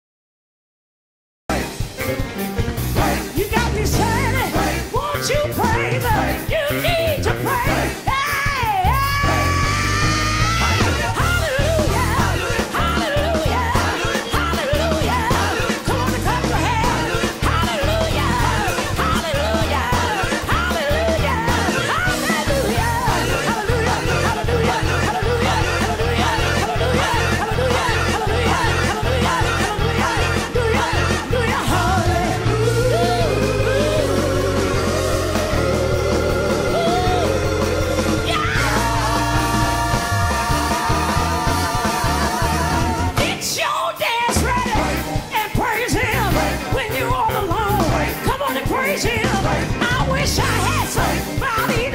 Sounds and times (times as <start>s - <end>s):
Music: 1.5s - 51.9s.